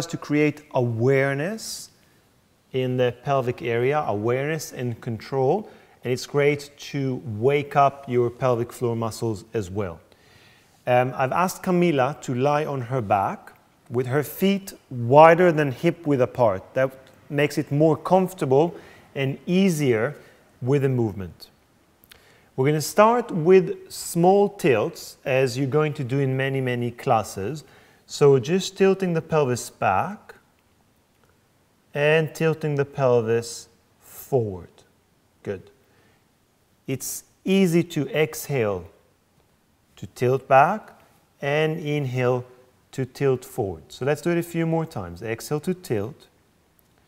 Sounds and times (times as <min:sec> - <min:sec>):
Speech: 0:00.0 - 0:02.0, 0:02.7 - 0:10.1, 0:10.8 - 0:21.5, 0:22.6 - 0:30.4, 0:31.9 - 0:35.8, 0:36.9 - 0:39.0, 0:40.0 - 0:46.4.